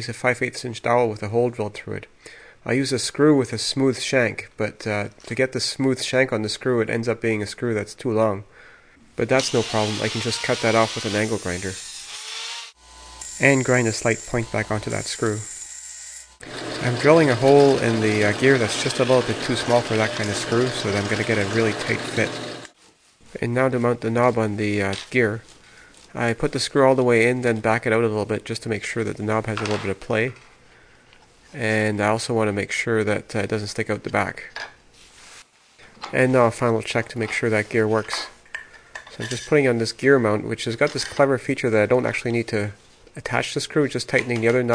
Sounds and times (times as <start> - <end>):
Speech: 0.0 - 8.5, 9.2 - 11.8, 13.4 - 15.5, 16.8 - 22.4, 23.3 - 25.5, 26.1 - 30.4, 31.5 - 34.6, 36.0 - 38.4, 39.2 - 44.7.